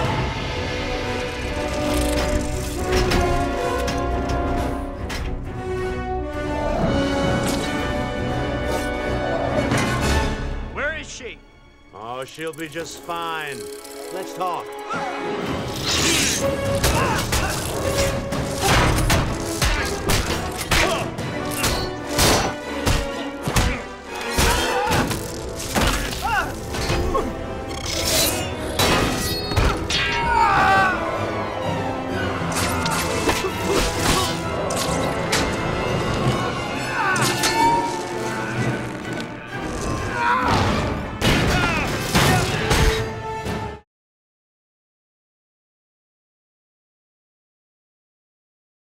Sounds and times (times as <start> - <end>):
Music: 0.0 - 43.9.